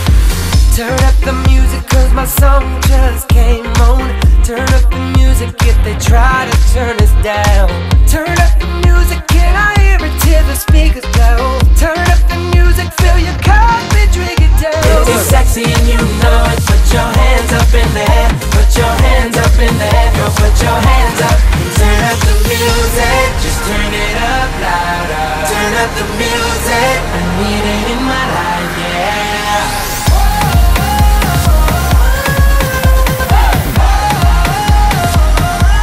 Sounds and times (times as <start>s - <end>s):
Disco: 0.0s - 35.8s.